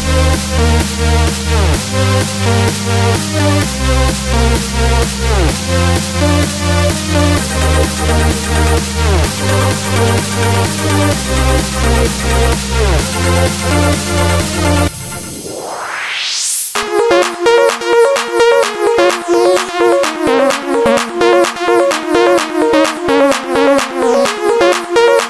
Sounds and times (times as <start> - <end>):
Music: 0.0 - 25.3.